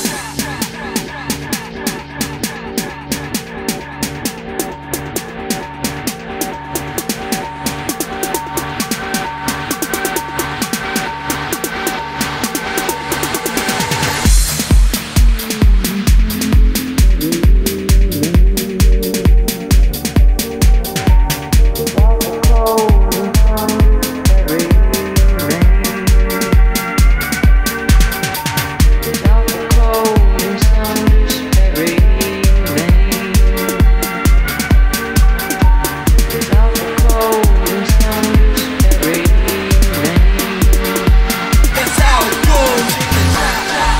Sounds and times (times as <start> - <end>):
Music: 0.0 - 43.9.